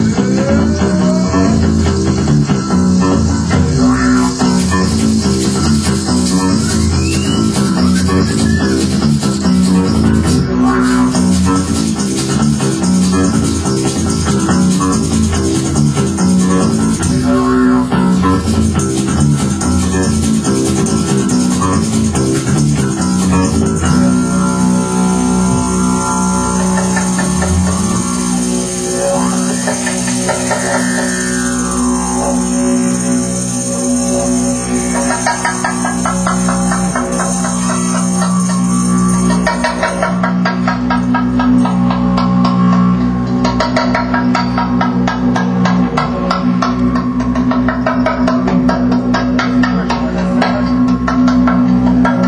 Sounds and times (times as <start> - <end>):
Drum: 0.0 - 32.0
Didgeridoo: 0.0 - 52.2.